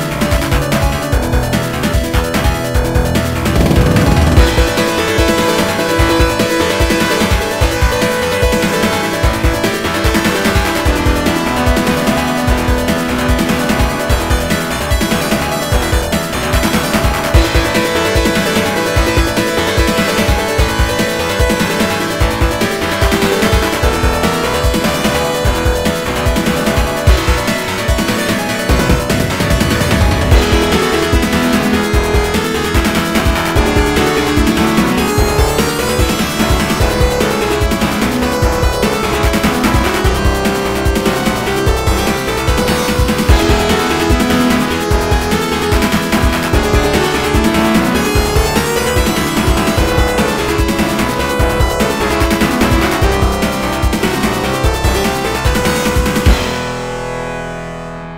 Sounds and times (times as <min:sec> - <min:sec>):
Music: 0:00.0 - 0:58.1.